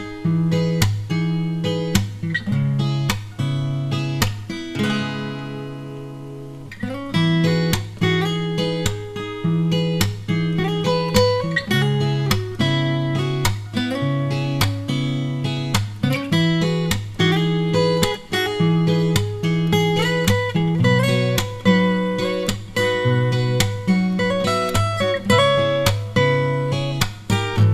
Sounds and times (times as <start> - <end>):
Guitar: 0.0 - 27.7.